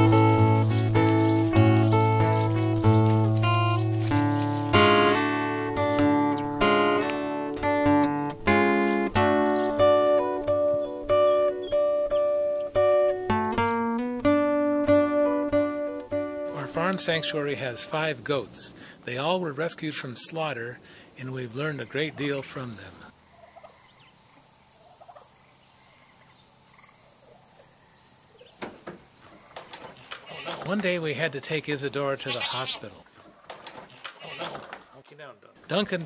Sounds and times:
Speech: 16.5s - 23.1s, 30.5s - 33.0s, 34.4s - 36.0s.

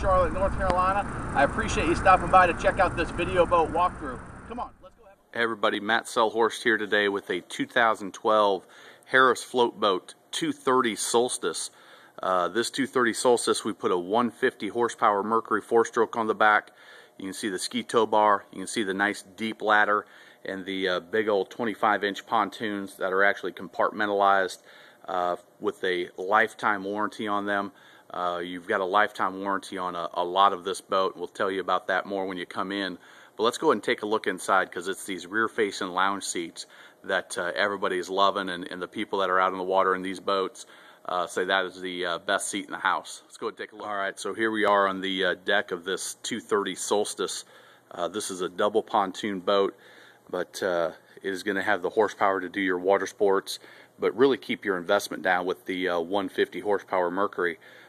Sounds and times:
Speech: 0.0s - 57.6s.

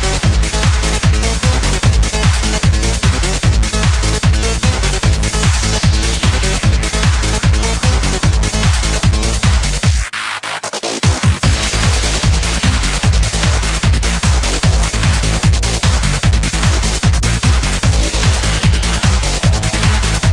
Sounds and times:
Trance music: 0.0s - 20.3s.

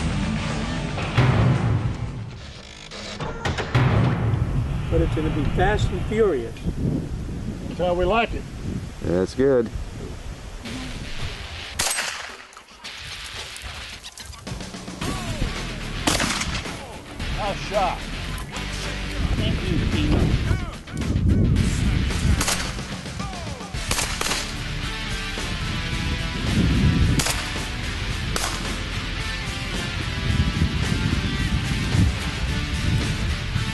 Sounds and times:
Music: 0.0s - 4.5s, 14.3s - 33.7s
Outside, rural or natural: 0.0s - 33.7s
Speech: 4.9s - 6.6s, 9.0s - 9.7s, 17.4s - 18.0s, 19.3s - 20.8s.

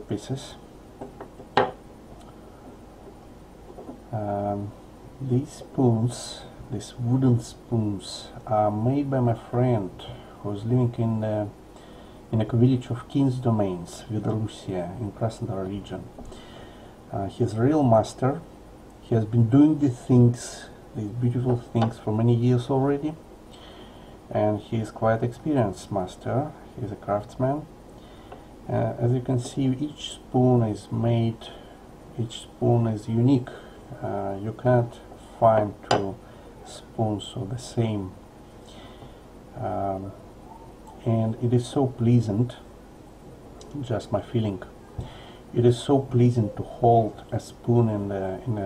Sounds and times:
Speech: 0.0s - 0.7s, 4.1s - 11.6s, 12.3s - 16.2s, 17.1s - 23.2s, 24.3s - 27.7s, 28.7s - 31.6s, 32.2s - 38.2s, 39.5s - 42.7s, 43.6s - 44.8s, 45.5s - 48.6s.

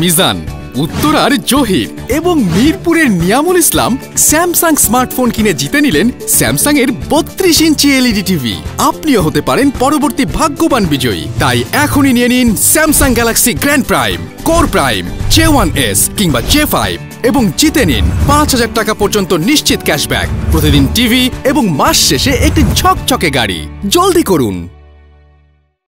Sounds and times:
Speech: 0.0s - 24.7s
Music: 0.0s - 25.8s.

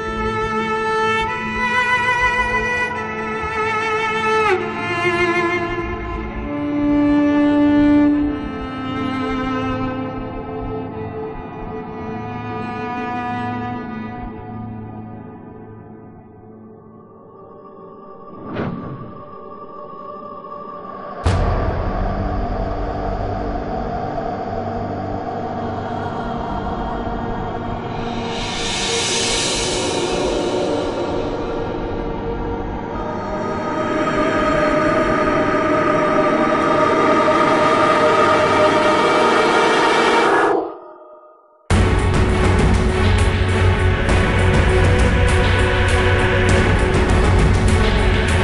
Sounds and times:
Scary music: 0.0s - 48.4s.

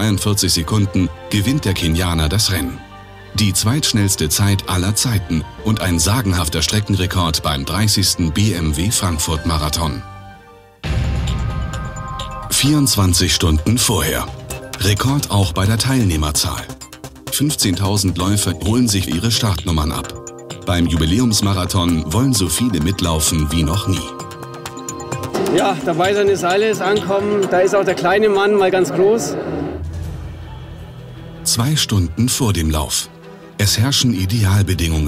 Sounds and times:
Speech: 0.0s - 10.0s, 12.5s - 24.2s, 25.5s - 29.7s, 31.4s - 35.0s
Music: 0.0s - 35.0s.

